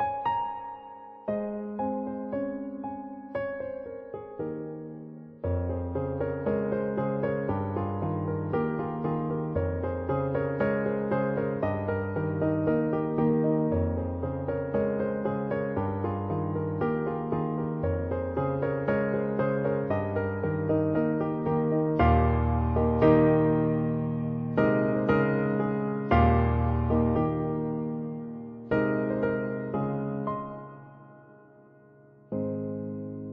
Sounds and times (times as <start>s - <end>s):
Music: 0.0s - 33.3s.